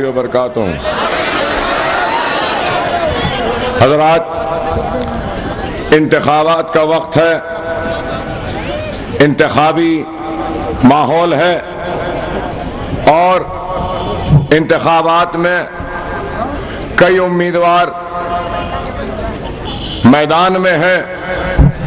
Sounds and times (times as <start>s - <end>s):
Male speech, man speaking: 0.0s - 0.8s, 3.8s - 4.4s, 5.9s - 7.5s, 9.2s - 10.1s, 10.8s - 11.7s, 13.1s - 13.5s, 14.5s - 15.8s, 17.0s - 18.0s, 20.0s - 21.2s
Narration, monologue: 0.0s - 0.8s, 5.9s - 7.8s, 9.2s - 12.3s, 12.9s - 21.4s.